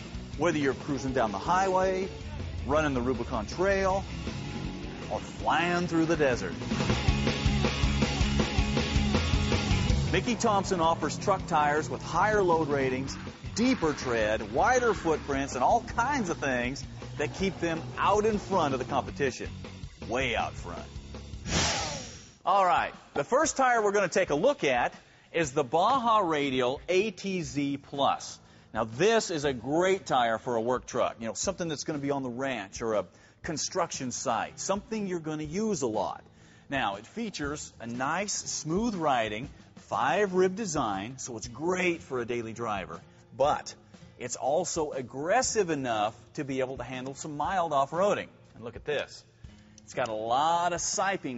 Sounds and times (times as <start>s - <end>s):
Music: 0.0s - 51.3s
Speech: 0.4s - 4.0s, 5.1s - 6.6s, 10.1s - 19.5s, 20.1s - 20.9s, 22.5s - 49.3s, 49.9s - 51.3s.